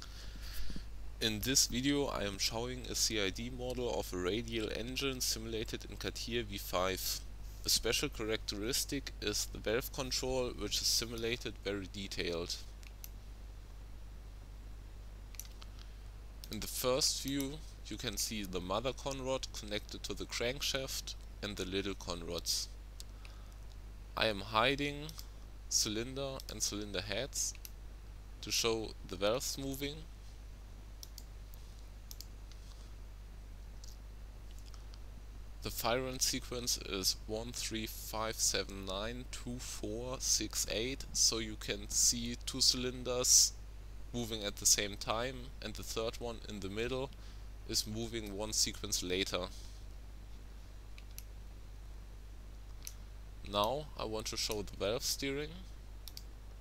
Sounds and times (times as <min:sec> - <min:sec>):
Speech: 0:01.2 - 0:12.7, 0:16.5 - 0:22.8, 0:24.2 - 0:27.6, 0:28.4 - 0:30.1, 0:35.6 - 0:49.6, 0:53.4 - 0:55.7.